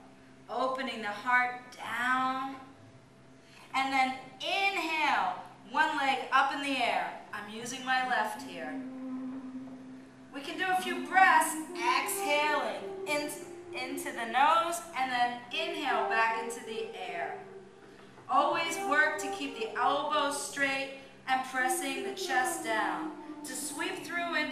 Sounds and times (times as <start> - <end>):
Music: 0.0 - 24.5
Speech: 0.5 - 2.6, 3.8 - 8.8, 10.4 - 17.4, 18.3 - 24.5.